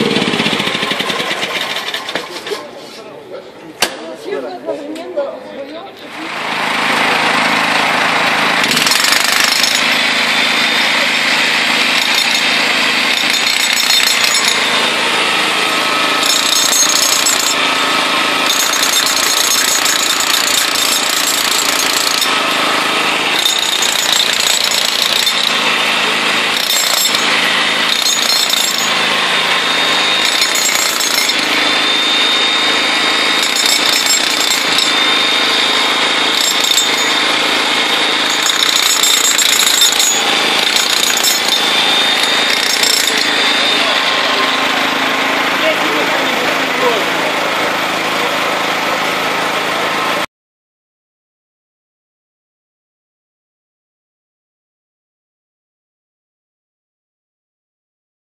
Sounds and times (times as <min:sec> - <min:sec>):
Jackhammer: 0:00.0 - 0:02.5, 0:06.1 - 0:50.3.